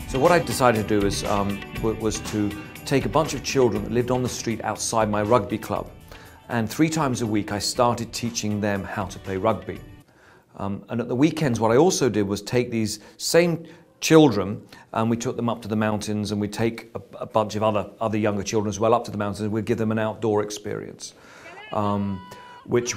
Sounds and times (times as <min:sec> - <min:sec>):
Music: 0:00.0 - 0:10.1
Speech: 0:00.1 - 0:05.9, 0:06.5 - 0:09.8, 0:10.6 - 0:22.9.